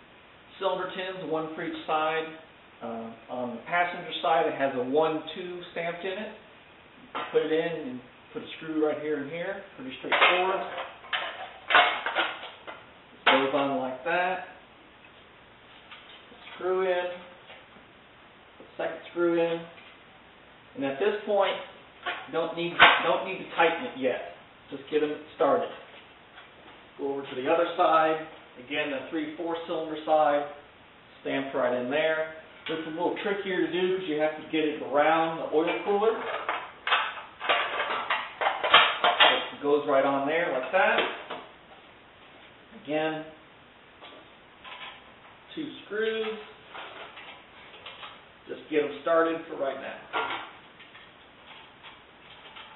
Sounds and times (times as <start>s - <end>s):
Speech: 0.5s - 6.5s, 7.2s - 10.8s, 13.2s - 14.6s, 16.4s - 17.4s, 18.7s - 19.8s, 20.8s - 25.9s, 27.0s - 36.4s, 39.2s - 41.2s, 42.8s - 43.4s, 45.5s - 46.6s, 48.5s - 50.2s.